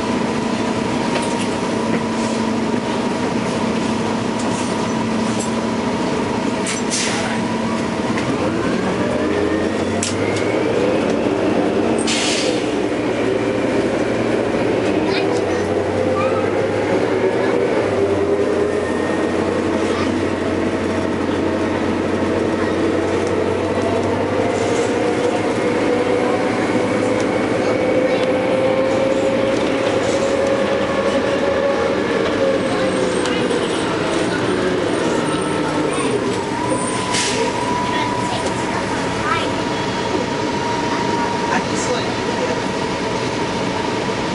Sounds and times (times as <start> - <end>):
Vehicle: 0.0 - 44.3.